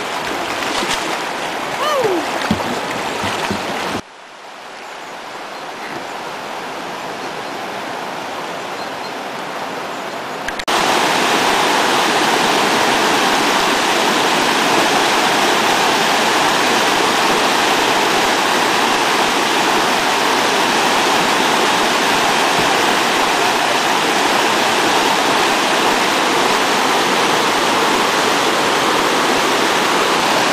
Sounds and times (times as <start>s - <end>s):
Waterfall: 0.0s - 30.5s.